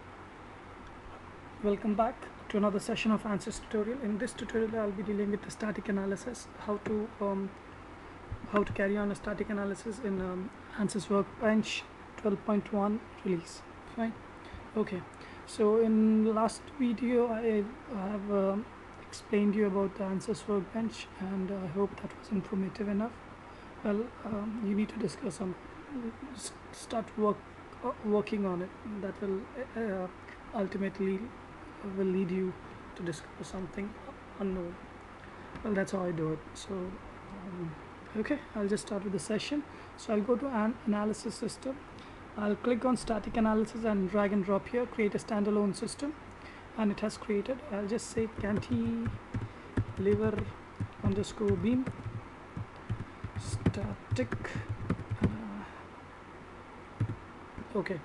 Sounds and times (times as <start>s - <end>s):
Speech: 1.6s - 7.6s, 8.5s - 23.2s, 23.8s - 34.8s, 35.6s - 41.8s, 42.4s - 46.2s, 46.8s - 49.2s, 50.0s - 52.0s, 53.4s - 54.6s, 57.6s - 58.0s.